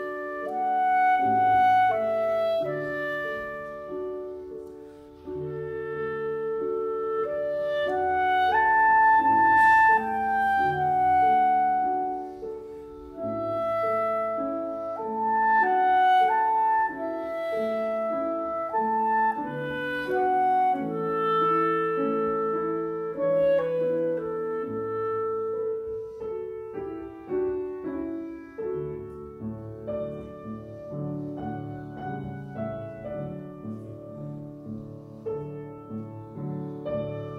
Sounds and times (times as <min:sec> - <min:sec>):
Clarinet: 0:00.0 - 0:37.3
Classical music: 0:00.0 - 0:37.3.